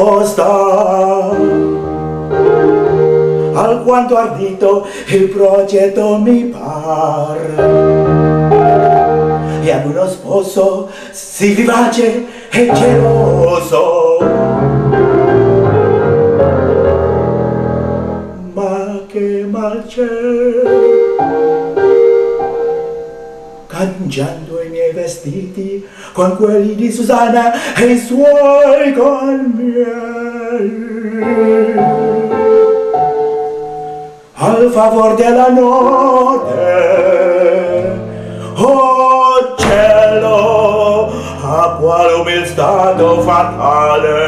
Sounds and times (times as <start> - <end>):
Music: 0.0 - 44.2.